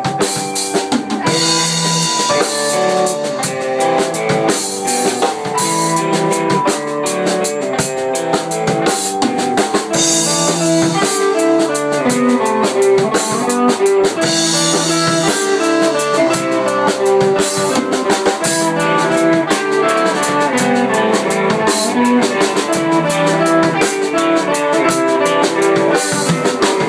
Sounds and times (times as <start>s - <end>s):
Music: 0.0s - 26.8s.